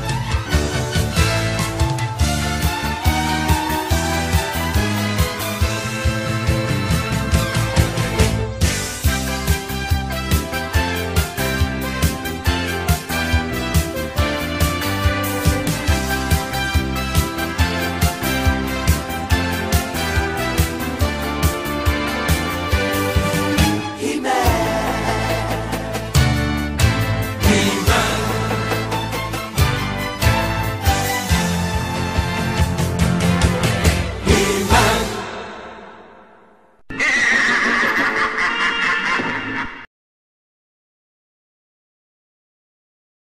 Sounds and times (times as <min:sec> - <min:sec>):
Music: 0:00.0 - 0:36.5.